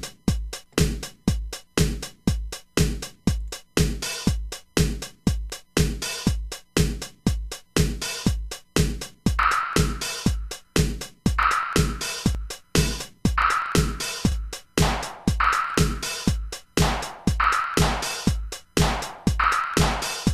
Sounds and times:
Drum machine: 0.0s - 20.3s.

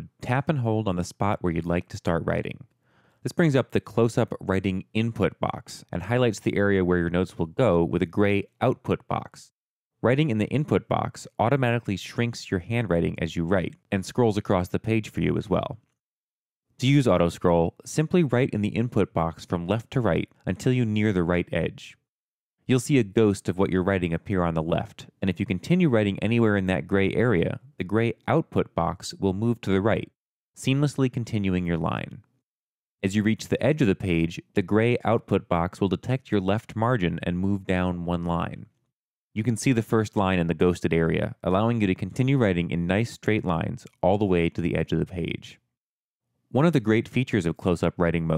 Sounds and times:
Speech: 0.0s - 15.9s, 16.8s - 32.3s, 33.0s - 38.8s, 39.4s - 45.6s, 46.6s - 48.3s.

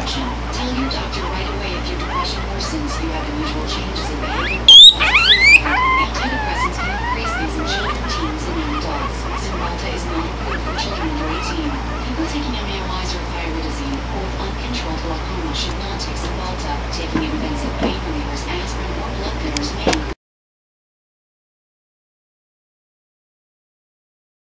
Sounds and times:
Speech: 0.0s - 20.2s
Oink: 1.8s - 12.1s.

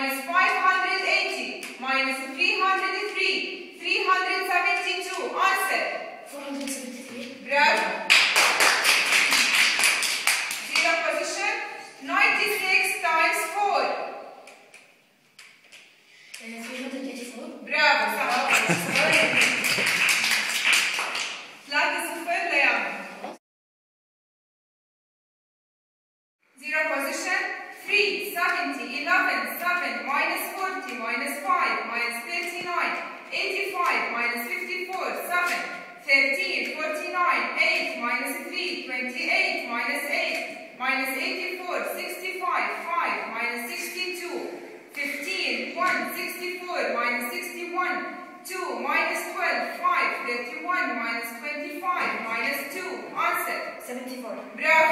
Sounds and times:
Speech: 0.0s - 8.0s, 16.4s - 19.6s, 26.6s - 54.9s.

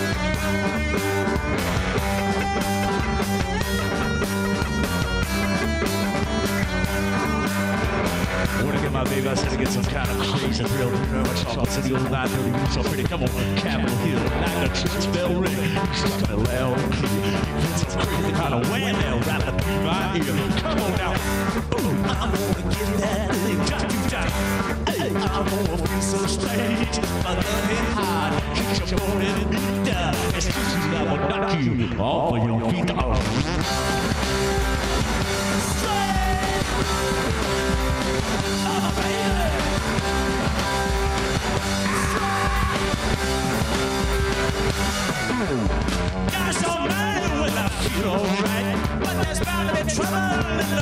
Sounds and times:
Blues: 0.0s - 50.8s.

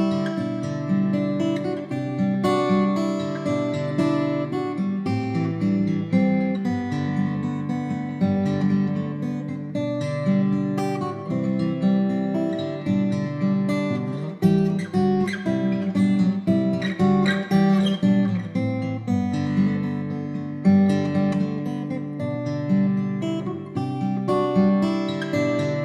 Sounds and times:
Acoustic guitar: 0.0s - 25.8s.

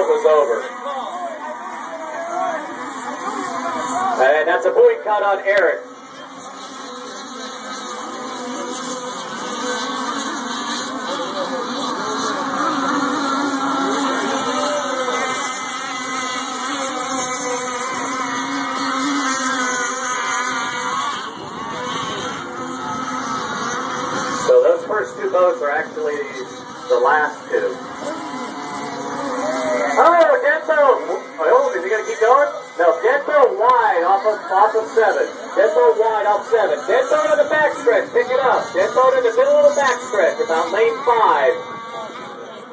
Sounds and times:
Wind noise (microphone): 20.6s - 24.5s.

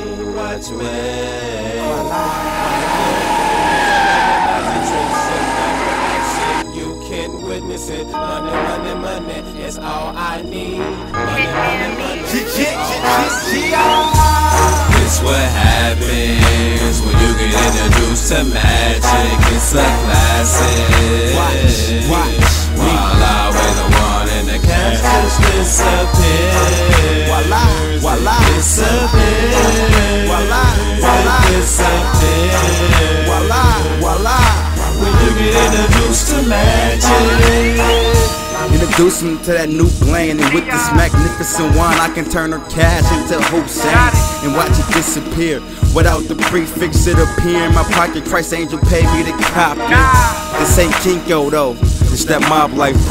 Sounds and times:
Music: 0.0s - 53.1s
Speech: 11.2s - 13.8s, 38.7s - 53.1s.

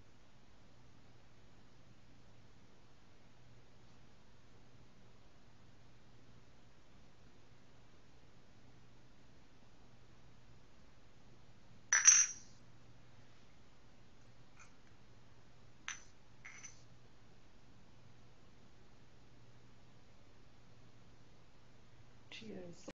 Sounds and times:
Speech: 22.3s - 22.9s.

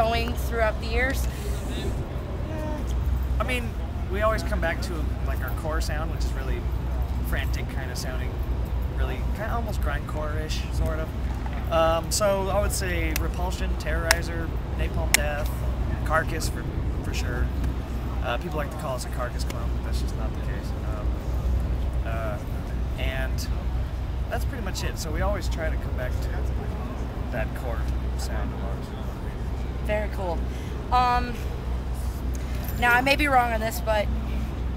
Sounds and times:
Speech: 18.2s - 21.2s.

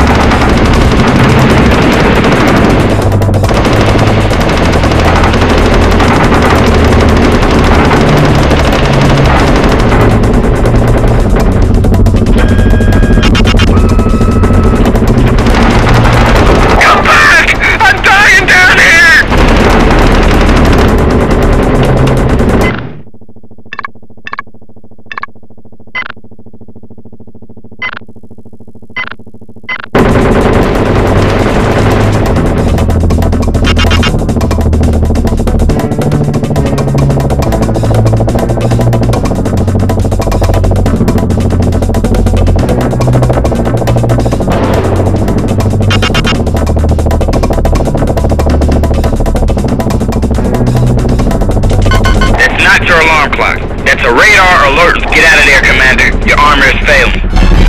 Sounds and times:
Music: 0.0s - 22.9s, 30.0s - 57.6s.

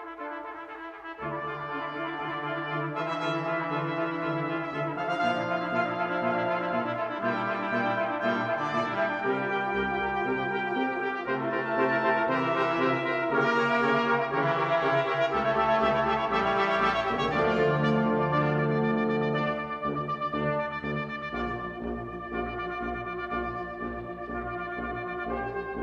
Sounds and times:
Trombone: 0.0s - 25.8s
Trumpet: 0.0s - 25.8s.

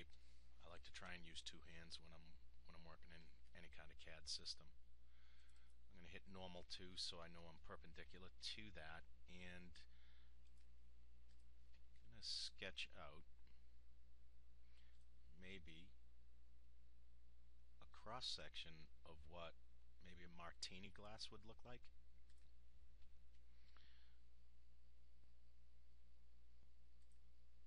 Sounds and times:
Speech: 0.0s - 4.8s, 5.9s - 9.9s, 12.1s - 13.3s, 15.4s - 16.0s, 17.8s - 21.9s.

